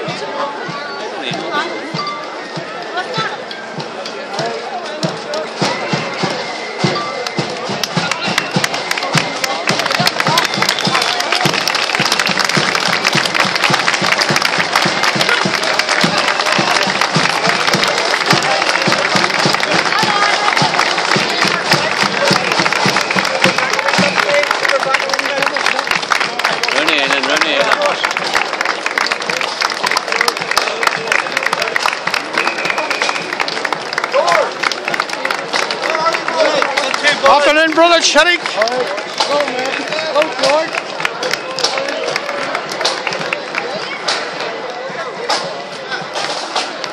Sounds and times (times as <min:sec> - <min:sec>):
Speech: 0:00.0 - 0:12.0, 0:14.0 - 0:28.4, 0:29.0 - 0:46.9.